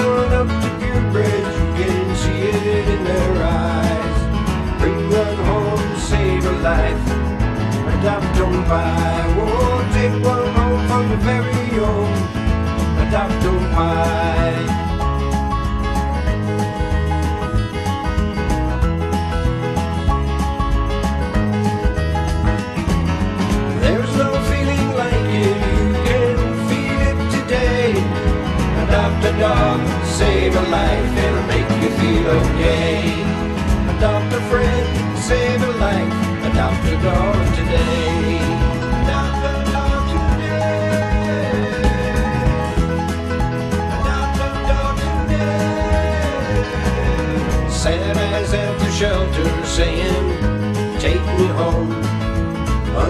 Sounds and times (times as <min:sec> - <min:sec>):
Music: 0:00.0 - 0:53.0.